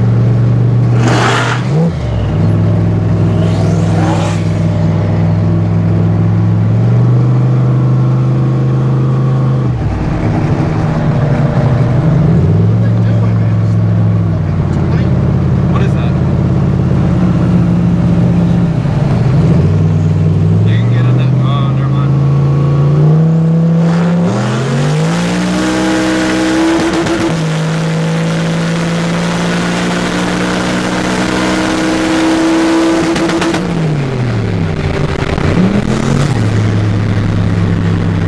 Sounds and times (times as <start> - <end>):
Car: 0.0 - 38.2.